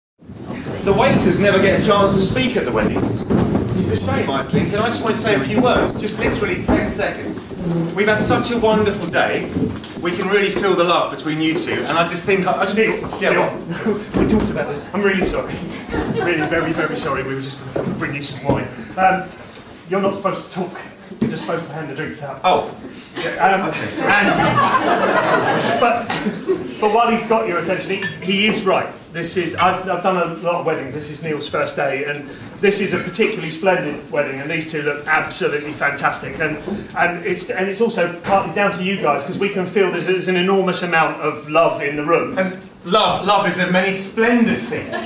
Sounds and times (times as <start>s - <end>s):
Speech: 0.6s - 45.0s.